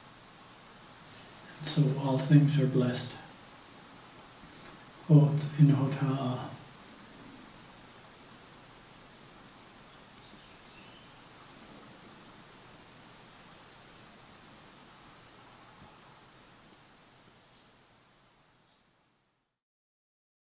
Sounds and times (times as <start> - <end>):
Speech: 1.5 - 3.3, 5.0 - 6.6.